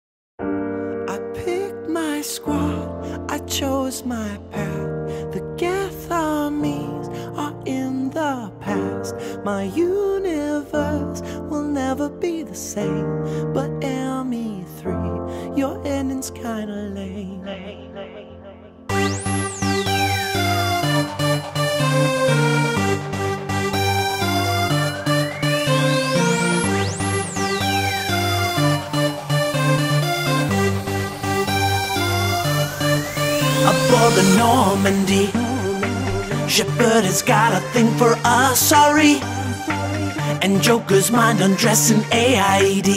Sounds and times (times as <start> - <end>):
Music: 0.4 - 42.9.